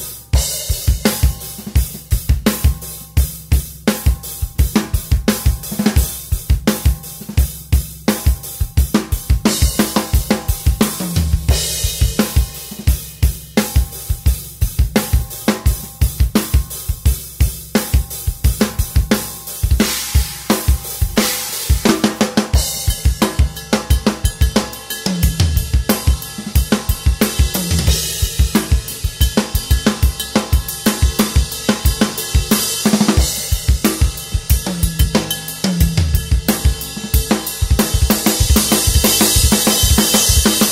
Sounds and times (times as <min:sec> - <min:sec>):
Bass drum: 0:00.0 - 0:40.7
Drum kit: 0:00.0 - 0:40.7.